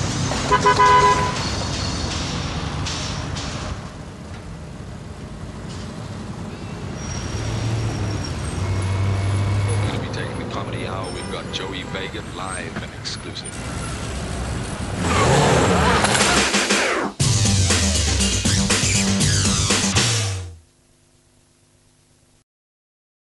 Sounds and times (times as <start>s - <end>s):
Speech: 9.8s - 13.6s
Music: 15.9s - 20.6s.